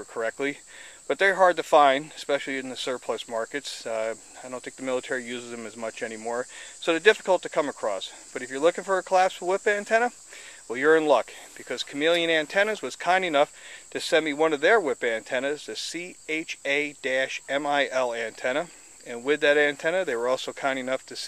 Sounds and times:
Speech: 0.0s - 21.2s.

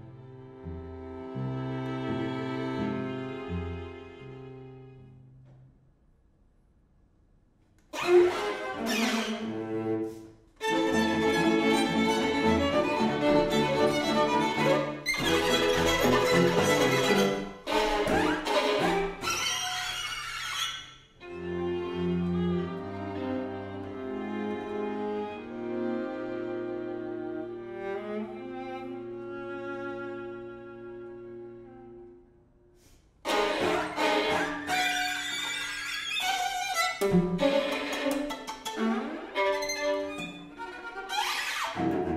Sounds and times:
Violin, fiddle: 0.0s - 5.1s, 7.9s - 32.2s, 33.2s - 42.1s
Orchestra: 0.0s - 5.4s, 7.9s - 42.1s
Cello: 0.0s - 5.6s, 7.8s - 42.1s.

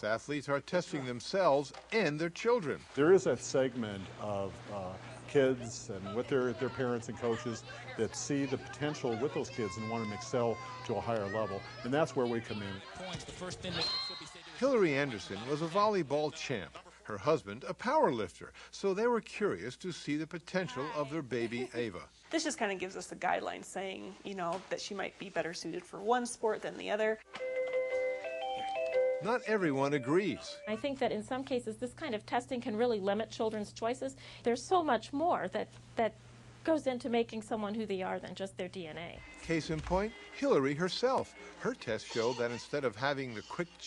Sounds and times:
Music: 27.3s - 30.8s, 39.2s - 41.7s.

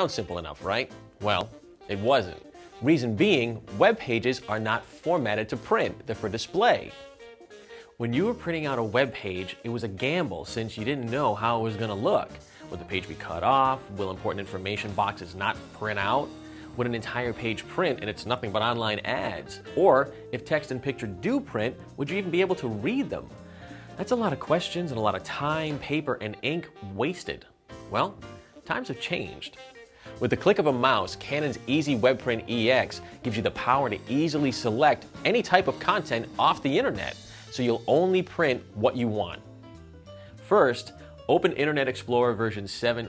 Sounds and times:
Speech: 0.0s - 6.9s, 8.0s - 23.3s, 24.0s - 29.6s, 30.2s - 39.4s, 40.4s - 43.0s
Music: 0.0s - 43.0s.

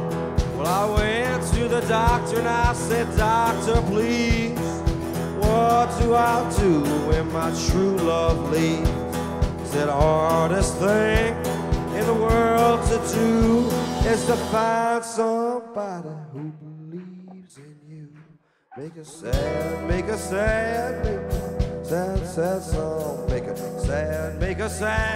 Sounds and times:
Music: 0.0s - 15.0s, 19.2s - 25.1s.

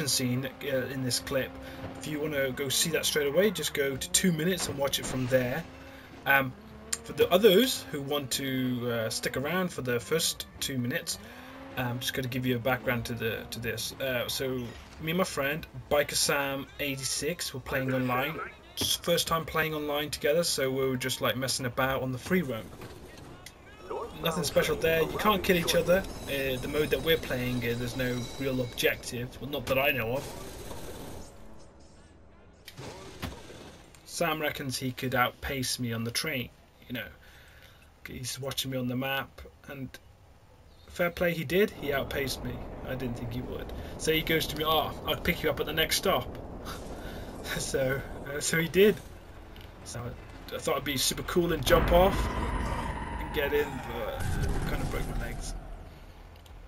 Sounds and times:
Speech: 0.0s - 5.7s, 6.3s - 11.2s, 11.8s - 30.3s, 34.1s - 37.2s, 38.0s - 40.0s, 40.9s - 46.4s, 47.5s - 49.0s, 49.8s - 52.4s, 53.2s - 55.6s.

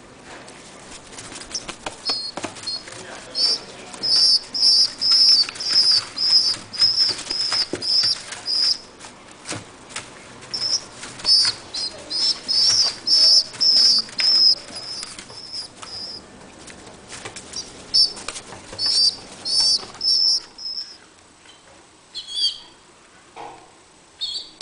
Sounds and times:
Bird vocalization, bird call, bird song: 2.0s - 8.8s, 10.5s - 16.2s, 18.8s - 21.0s, 22.1s - 22.8s, 24.2s - 24.6s.

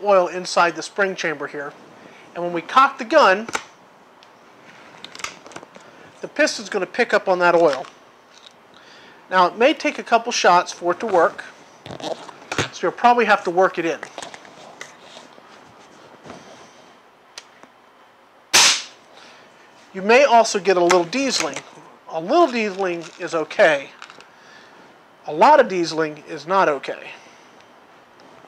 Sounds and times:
Cap gun: 18.6s - 19.0s.

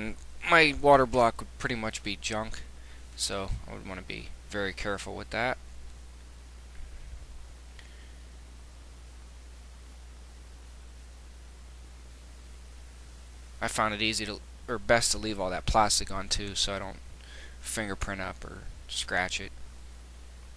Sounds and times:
Speech: 0.0s - 5.6s, 13.6s - 17.0s, 17.6s - 19.5s.

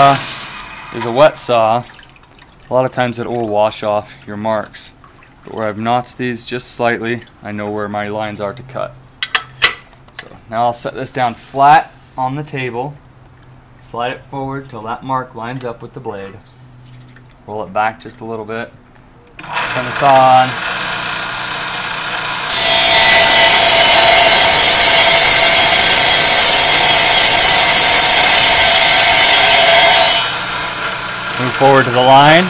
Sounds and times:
Speech: 0.0s - 0.2s, 1.0s - 1.9s, 2.7s - 9.0s, 10.2s - 13.0s, 13.8s - 16.4s, 17.5s - 18.8s, 19.7s - 20.6s, 31.4s - 32.5s.

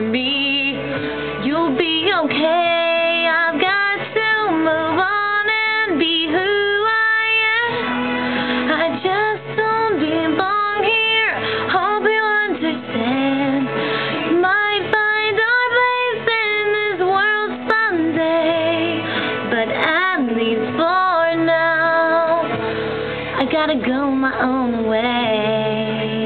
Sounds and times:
Female singing: 0.0s - 7.8s, 8.6s - 22.6s, 23.4s - 26.2s
Music: 0.0s - 26.2s.

